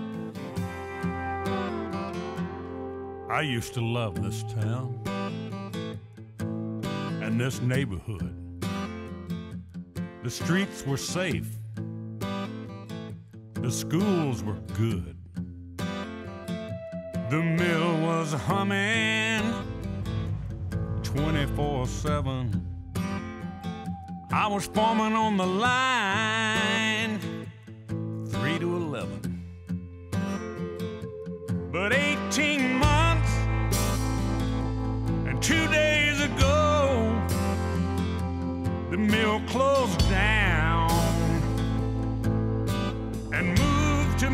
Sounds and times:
Music: 0:00.0 - 0:44.3.

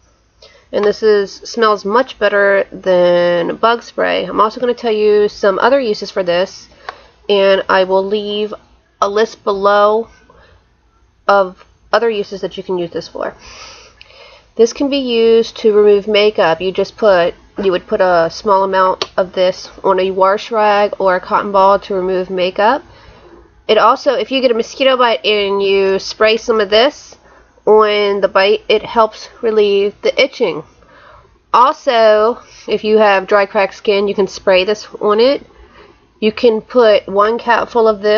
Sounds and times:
Speech: 0:00.7 - 0:06.7, 0:07.3 - 0:10.4, 0:11.3 - 0:13.4, 0:14.6 - 0:22.9, 0:23.7 - 0:30.7, 0:31.6 - 0:35.4, 0:36.2 - 0:38.1.

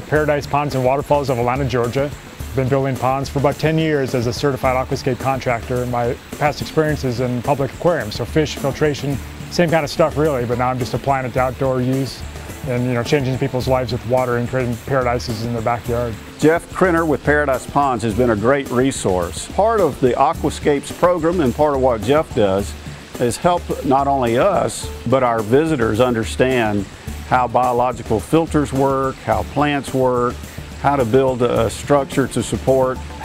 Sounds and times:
Water: 0:00.0 - 0:33.2.

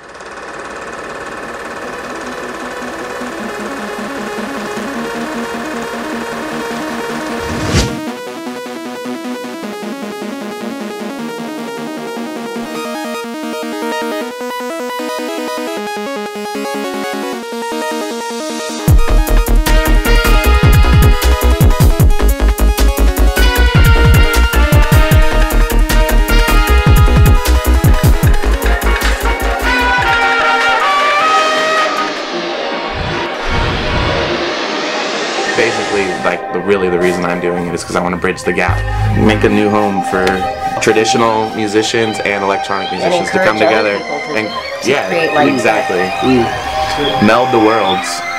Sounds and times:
Music: 0:01.4 - 0:48.3
Speech: 0:35.6 - 0:48.2.

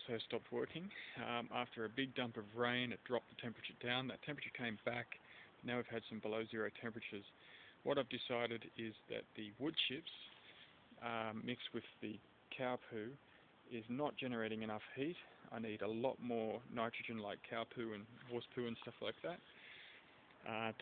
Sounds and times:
Speech: 0:00.0 - 0:10.3, 0:11.0 - 0:19.4, 0:20.4 - 0:20.8.

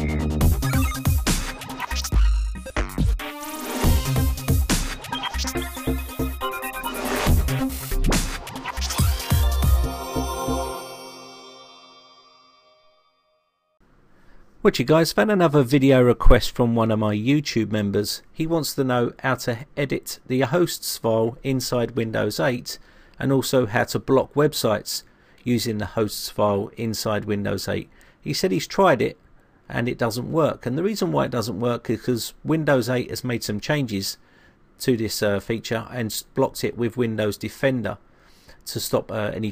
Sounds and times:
Music: 0:00.0 - 0:13.8.

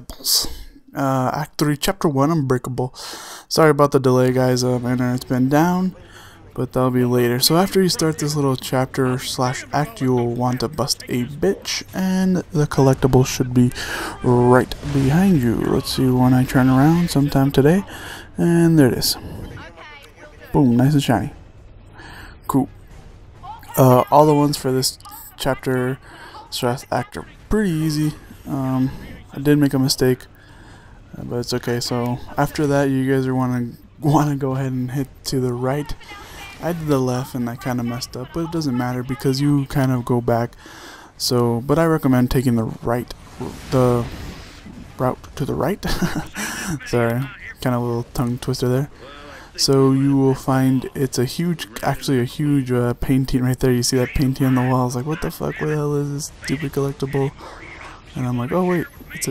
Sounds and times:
Speech: 0:00.0 - 0:21.4, 0:22.4 - 0:22.7, 0:23.5 - 0:30.3, 0:31.1 - 0:40.6, 0:41.2 - 0:44.2, 0:44.8 - 0:59.3.

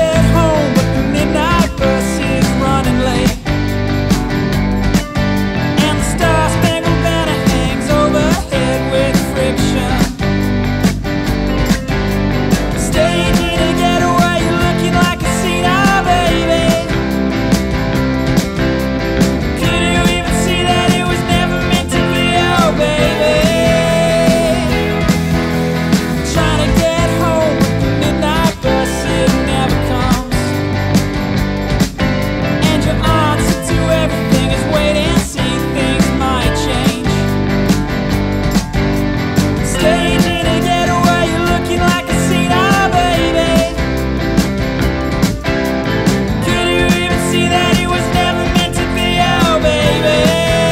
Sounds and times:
Music: 0:00.0 - 0:50.7.

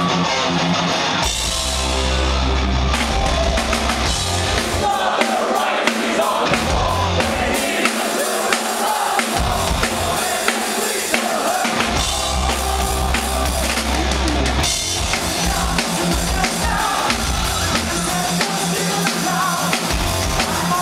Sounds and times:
Blues: 0:00.0 - 0:20.8.

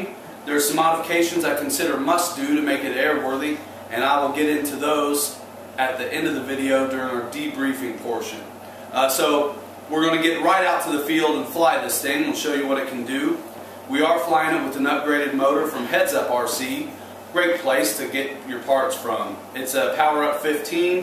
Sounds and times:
Speech: 0:00.0 - 0:21.0.

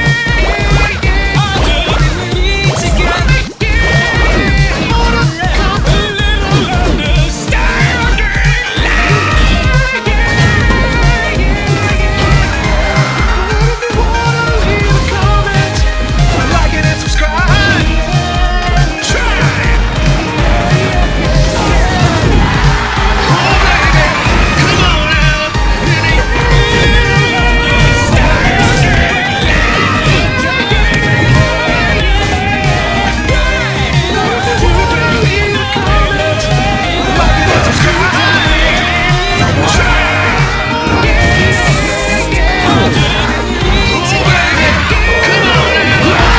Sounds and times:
Music: 0:00.0 - 0:46.3.

